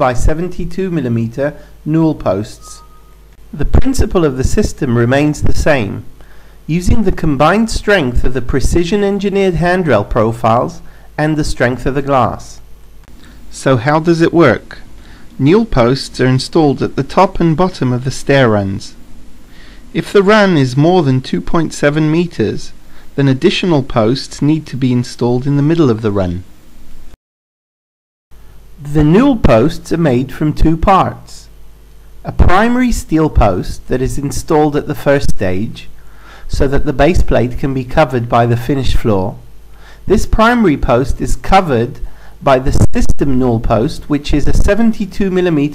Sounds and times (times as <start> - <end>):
Speech: 0.0 - 2.9, 3.5 - 6.1, 6.7 - 12.7, 13.5 - 19.0, 19.9 - 26.5, 28.8 - 31.6, 32.2 - 39.5, 40.1 - 45.7.